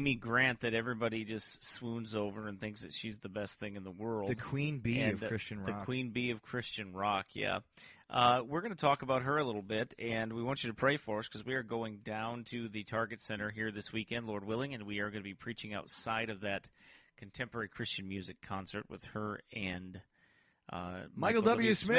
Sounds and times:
Speech: 0:00.0 - 0:20.0, 0:20.7 - 0:21.9.

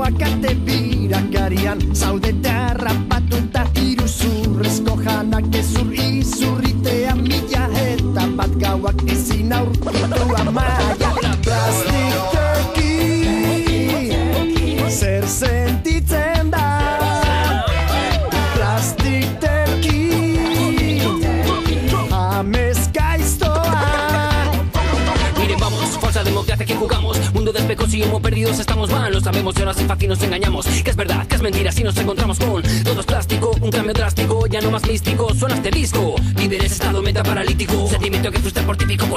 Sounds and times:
Reggae: 0:00.0 - 0:39.1.

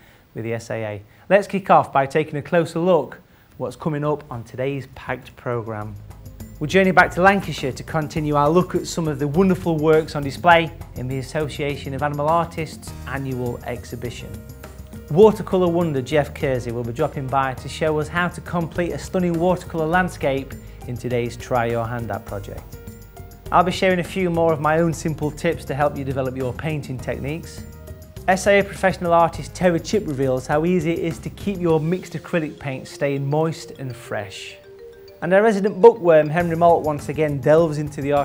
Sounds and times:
Speech: 0:00.4 - 0:06.0, 0:06.6 - 0:14.4, 0:15.1 - 0:22.7, 0:23.5 - 0:27.6, 0:28.3 - 0:34.6, 0:35.2 - 0:38.2
Music: 0:03.1 - 0:38.2.

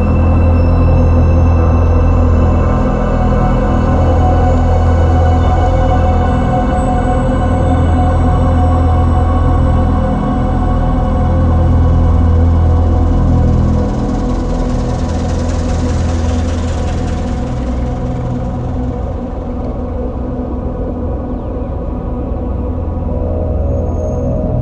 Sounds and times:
Ambient music: 0:00.0 - 0:24.6.

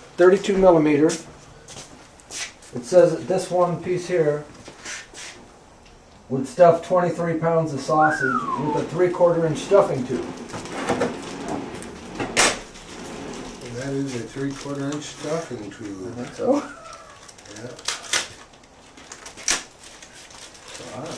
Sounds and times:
Inside, small room: 0:00.0 - 0:21.1
Speech: 0:00.2 - 0:01.3, 0:02.8 - 0:04.5, 0:06.3 - 0:10.3, 0:13.6 - 0:16.7.

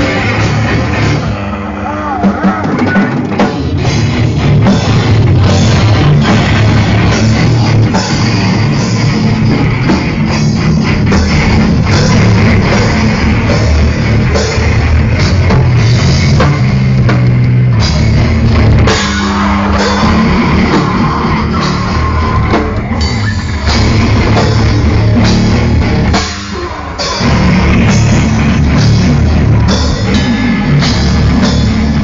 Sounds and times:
Heavy metal: 0:00.0 - 0:32.0.

